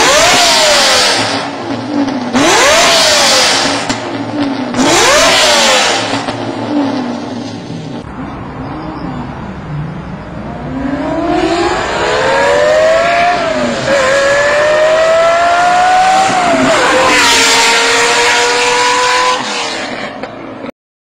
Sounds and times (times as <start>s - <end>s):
Accelerating, revving, vroom: 0.0s - 1.4s, 2.4s - 4.0s, 4.8s - 6.2s, 10.6s - 20.2s
Car: 0.0s - 20.7s.